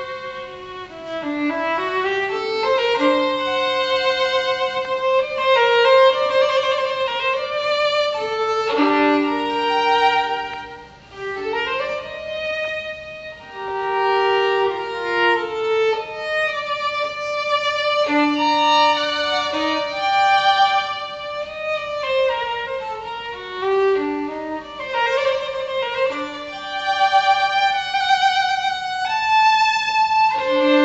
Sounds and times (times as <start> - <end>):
Violin, fiddle: 0.0 - 30.8.